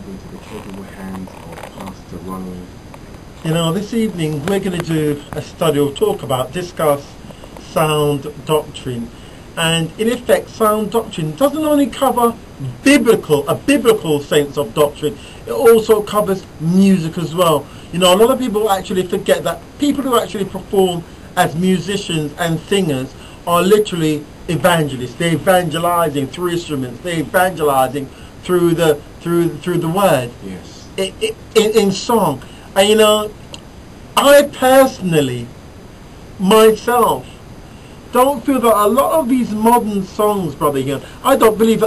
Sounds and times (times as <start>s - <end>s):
Speech: 0.0s - 2.7s, 3.4s - 33.4s, 34.2s - 35.5s, 36.4s - 37.4s, 38.1s - 41.8s.